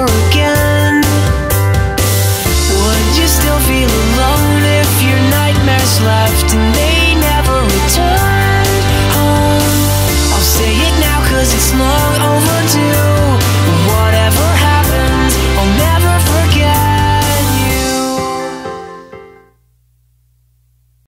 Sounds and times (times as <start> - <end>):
Music: 0.0 - 19.7.